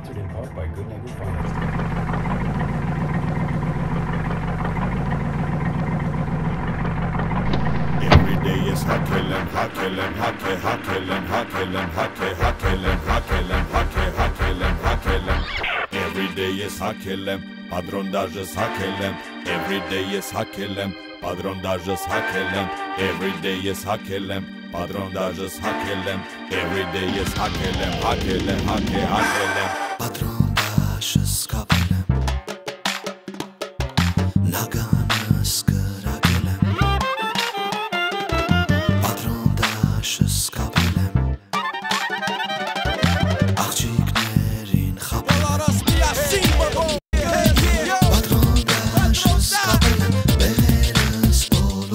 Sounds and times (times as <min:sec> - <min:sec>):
Music: 0:00.0 - 0:01.4, 0:07.5 - 0:51.9.